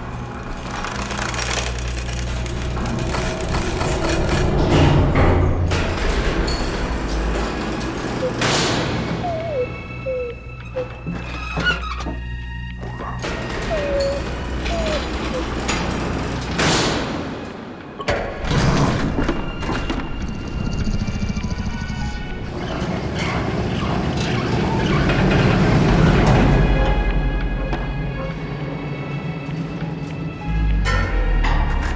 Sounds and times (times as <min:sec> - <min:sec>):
Music: 0:00.0 - 0:31.9.